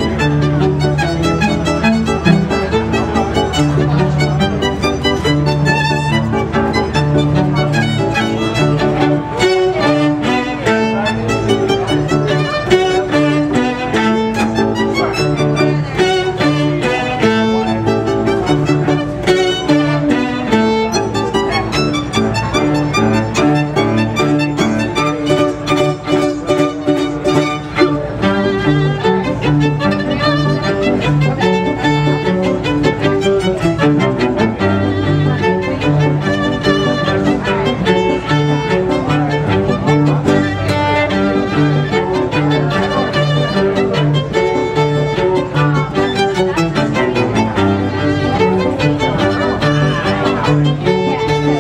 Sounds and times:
Cello: 0.0s - 51.6s
Violin, fiddle: 0.0s - 51.6s.

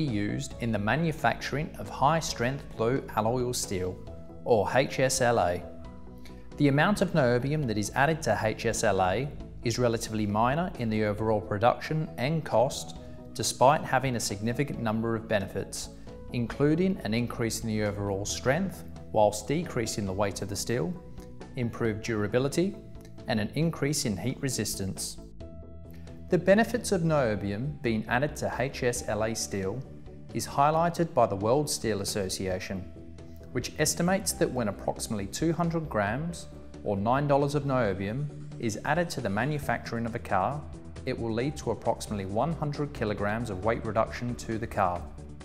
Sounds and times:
Speech: 0.0s - 5.7s, 6.6s - 21.0s, 21.6s - 25.2s, 26.3s - 29.8s, 30.4s - 32.9s, 33.6s - 45.1s.

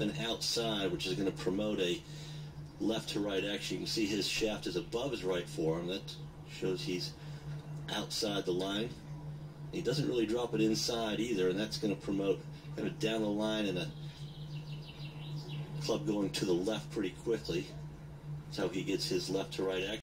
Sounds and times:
Speech: 0.0s - 2.0s, 2.8s - 7.2s, 7.9s - 9.0s, 9.7s - 14.0s, 15.8s - 17.8s, 18.5s - 20.0s.

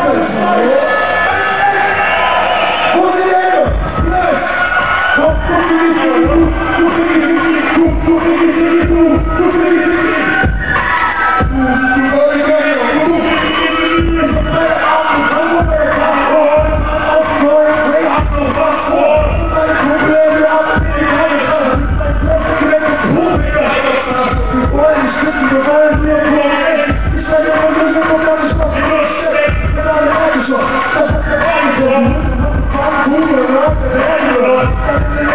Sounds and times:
Music: 0.0s - 35.3s.

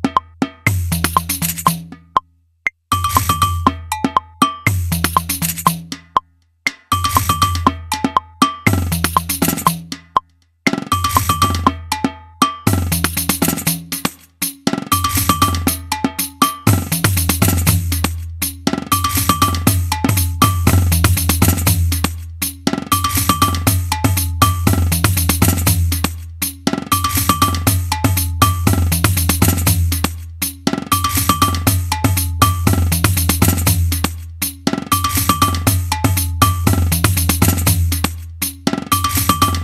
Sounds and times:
Wood block: 0.0s - 39.6s.

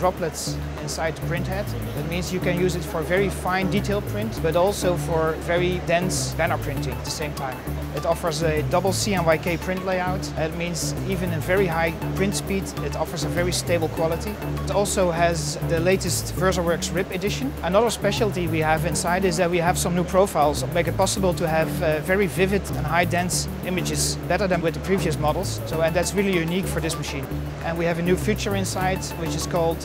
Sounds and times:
Music: 0.0s - 29.8s
Speech: 0.0s - 29.8s.

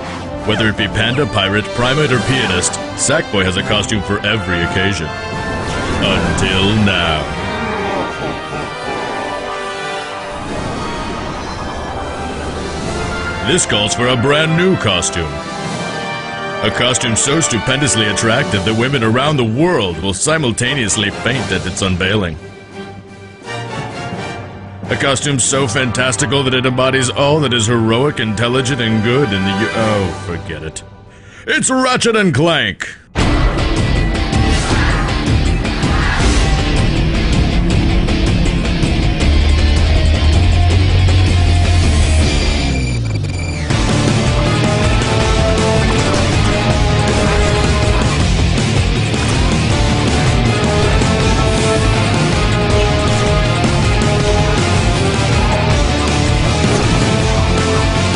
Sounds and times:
Music: 0.0s - 58.1s
Speech: 0.5s - 5.2s, 6.0s - 7.3s, 13.5s - 15.4s, 16.6s - 22.4s, 24.9s - 30.8s, 31.5s - 33.1s.

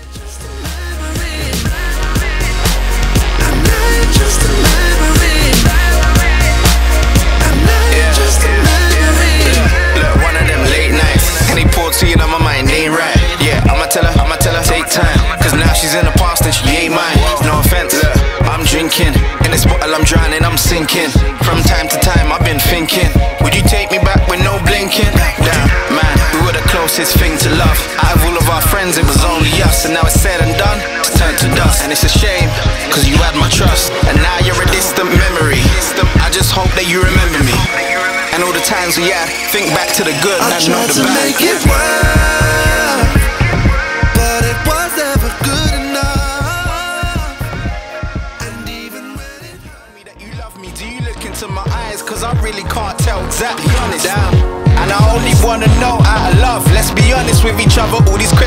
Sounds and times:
Sampler: 0.0s - 58.4s.

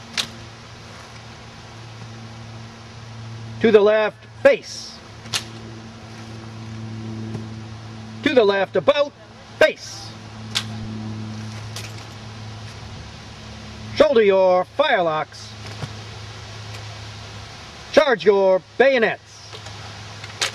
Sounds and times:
Speech: 3.6s - 5.0s, 8.2s - 10.2s, 14.0s - 15.6s, 18.0s - 19.6s.

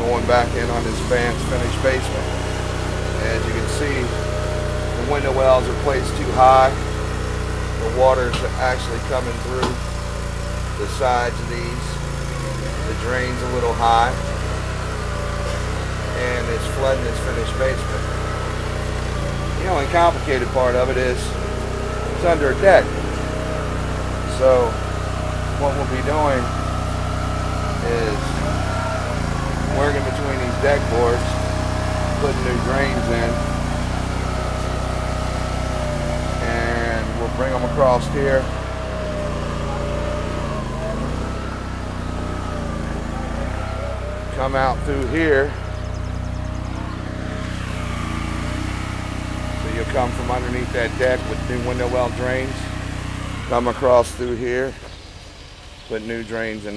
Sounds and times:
Speech: 0.0s - 2.3s, 3.2s - 4.2s, 4.9s - 6.8s, 7.8s - 9.8s, 10.8s - 14.3s, 16.1s - 18.1s, 19.5s - 21.4s, 22.2s - 23.0s, 24.3s - 24.8s, 25.6s - 26.5s, 27.8s - 28.5s, 29.5s - 31.4s, 32.0s - 33.5s, 36.4s - 38.6s, 44.3s - 45.6s, 49.6s - 52.7s, 53.5s - 54.8s, 55.9s - 56.7s.

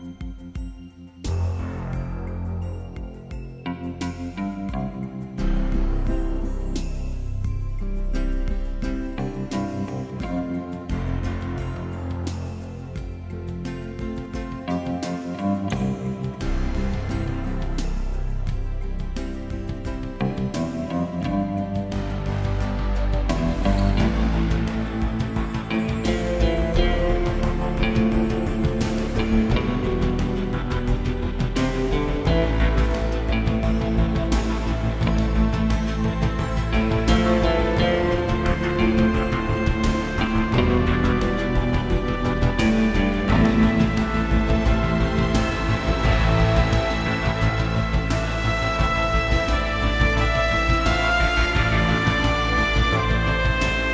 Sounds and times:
Music: 0.0s - 53.9s.

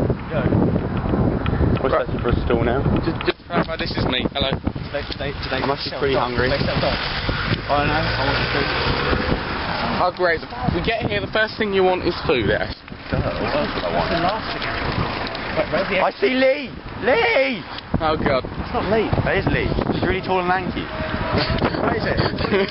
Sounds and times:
Car: 0.0s - 22.7s.

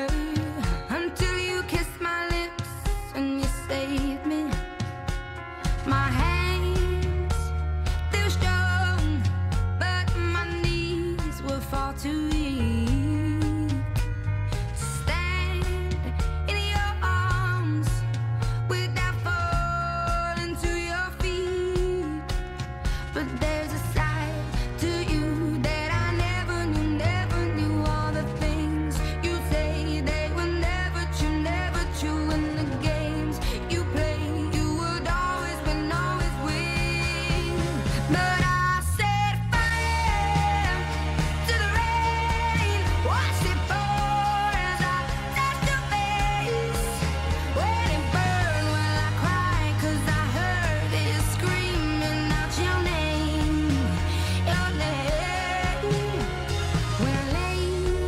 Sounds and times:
Music: 0.0s - 58.0s.

